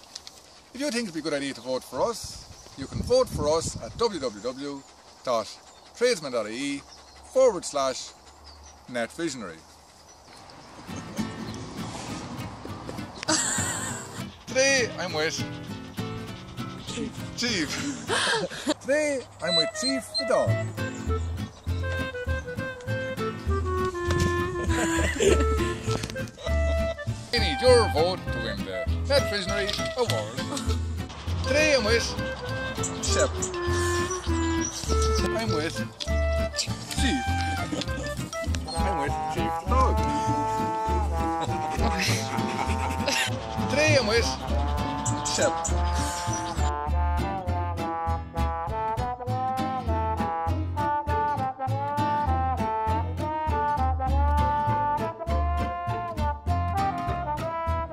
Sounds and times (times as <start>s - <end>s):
Music: 10.8s - 17.7s, 19.5s - 57.9s.